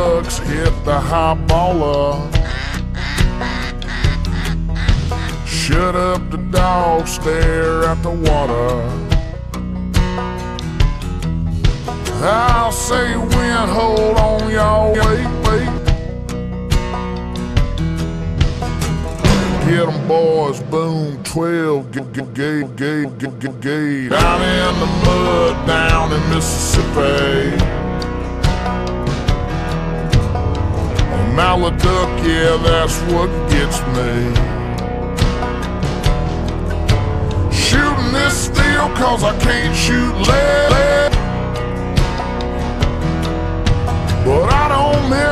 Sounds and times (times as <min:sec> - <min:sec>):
Music: 0:00.0 - 0:45.3.